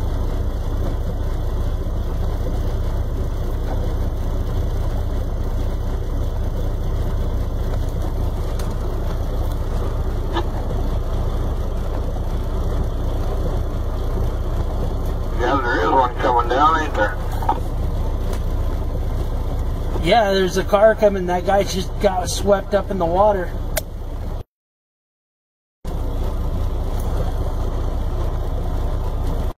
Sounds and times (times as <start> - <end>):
Speech: 15.3 - 17.6, 20.0 - 23.6.